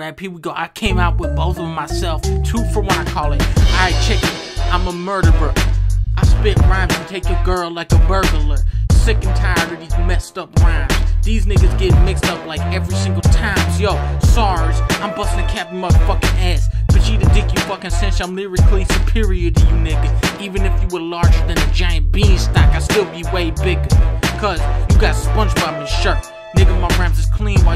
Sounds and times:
Rapping: 0:00.0 - 0:27.7.

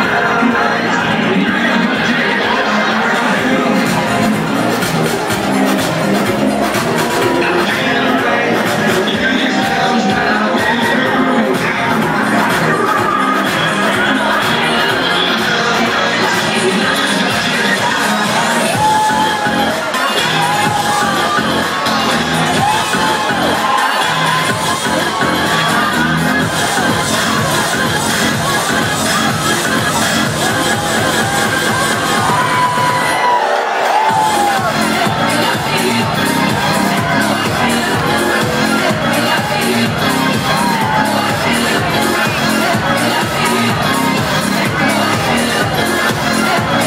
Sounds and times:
Exciting music: 0:00.0 - 0:46.8.

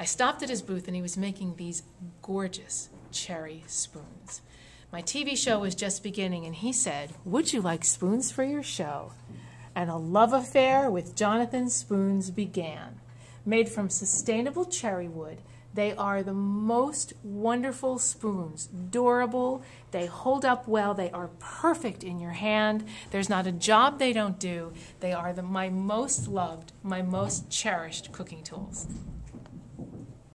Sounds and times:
Speech: 0:00.0 - 0:04.4, 0:05.0 - 0:09.2, 0:09.8 - 0:29.0.

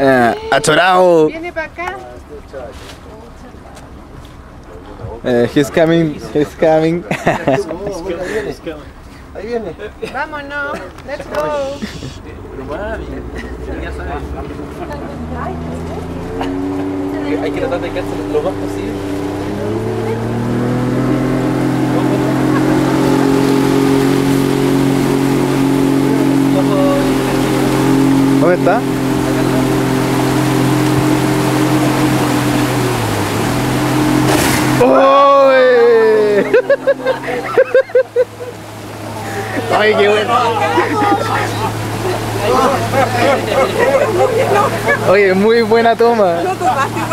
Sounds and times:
Motorboat, speedboat: 0:00.0 - 0:47.1.

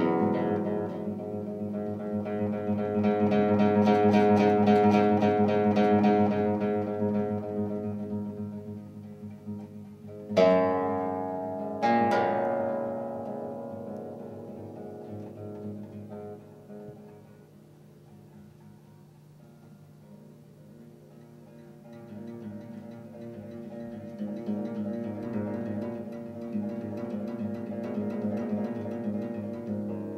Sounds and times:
Classical music: 0:00.0 - 0:17.4
Guitar: 0:00.0 - 0:30.1.

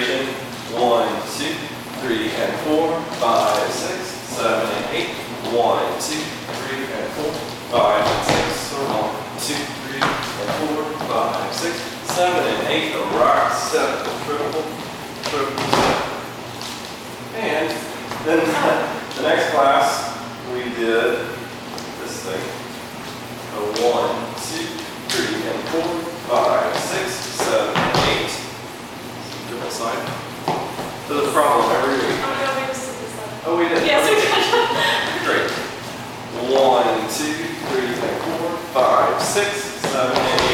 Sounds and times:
Speech: 0:00.0 - 0:16.1, 0:17.3 - 0:21.4, 0:23.5 - 0:28.4, 0:31.1 - 0:35.7, 0:36.3 - 0:40.5.

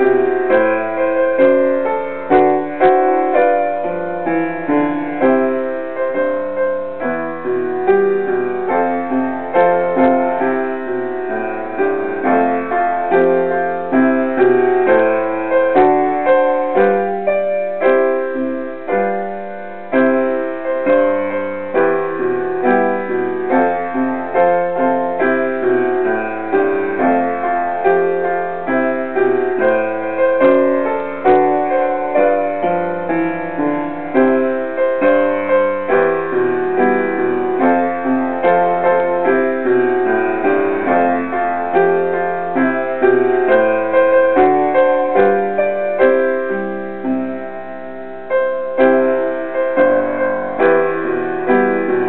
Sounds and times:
Music: 0:00.0 - 0:52.0.

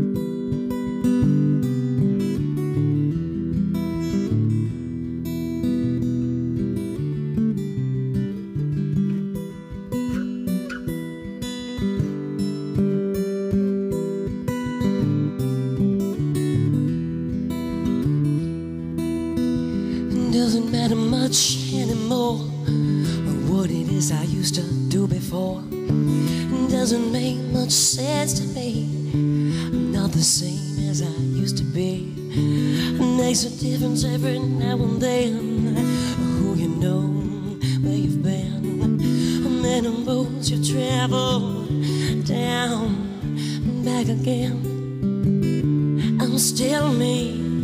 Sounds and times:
Music: 0:00.0 - 0:47.6
Female singing: 0:20.0 - 0:45.0, 0:46.0 - 0:47.6.

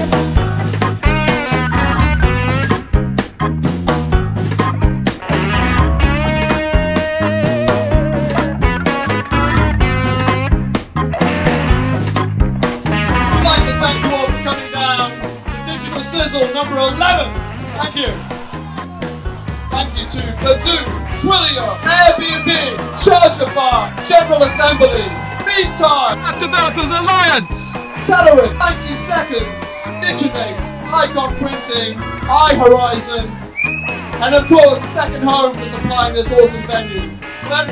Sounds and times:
Music: 0:00.0 - 0:37.7
Speech: 0:13.4 - 0:18.2, 0:19.8 - 0:33.3, 0:34.2 - 0:37.7.

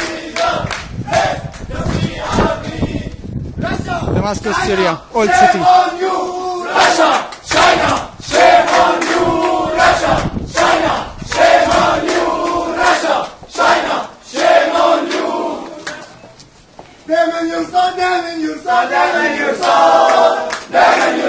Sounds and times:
Outside, urban or manmade: 0:00.0 - 0:21.2
Speech: 0:03.7 - 0:05.8.

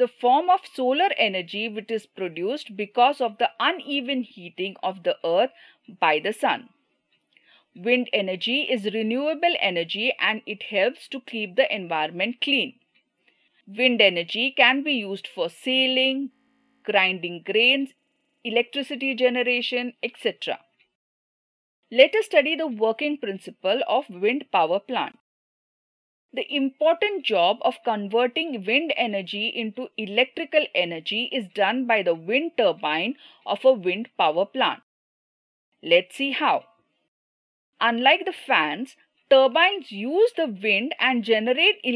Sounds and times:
Speech: 0:00.0 - 0:06.7, 0:07.8 - 0:12.8, 0:13.7 - 0:16.3, 0:16.9 - 0:20.6, 0:22.0 - 0:25.2, 0:26.4 - 0:34.8, 0:35.8 - 0:36.7, 0:37.8 - 0:41.9.

